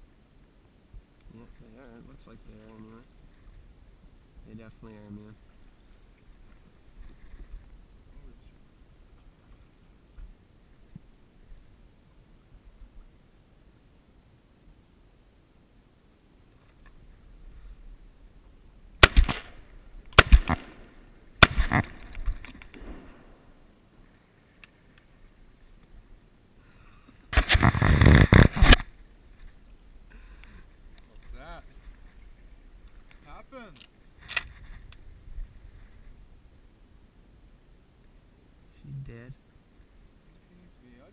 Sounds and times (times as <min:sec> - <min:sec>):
Speech: 0:01.3 - 0:03.1, 0:04.4 - 0:05.4, 0:31.1 - 0:31.7, 0:33.2 - 0:33.8, 0:38.7 - 0:39.4, 0:40.4 - 0:41.1.